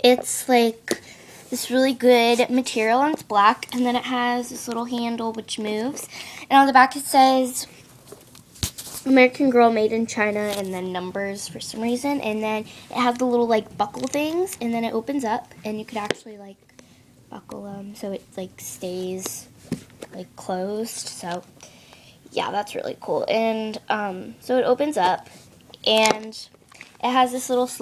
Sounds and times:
Speech: 0.0s - 7.7s, 9.0s - 16.6s, 17.3s - 19.5s, 20.1s - 21.5s, 22.3s - 25.2s, 25.8s - 27.8s.

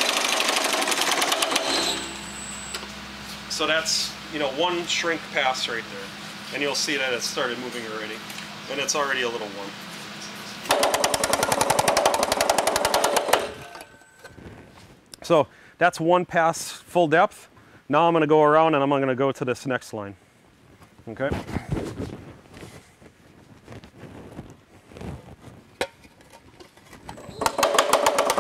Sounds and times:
Speech: 3.5s - 10.4s, 15.2s - 20.2s, 21.1s - 21.5s.

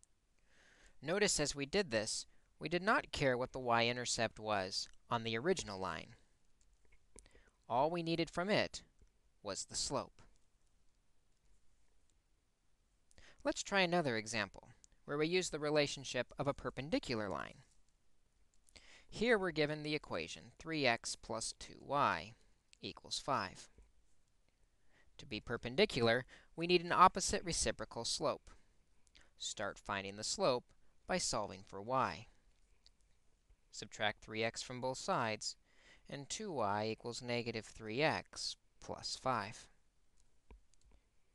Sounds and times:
Speech: 1.0s - 6.3s, 7.7s - 10.3s, 13.4s - 17.7s, 19.1s - 23.8s, 25.2s - 28.6s, 29.4s - 32.4s, 33.7s - 39.8s.

